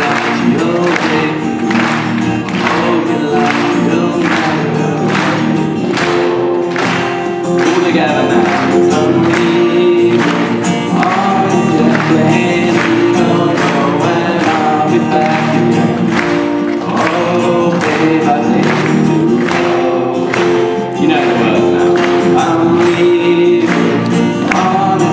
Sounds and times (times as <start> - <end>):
Male singing: 0.0 - 6.9, 7.6 - 25.1
Music: 0.0 - 25.1.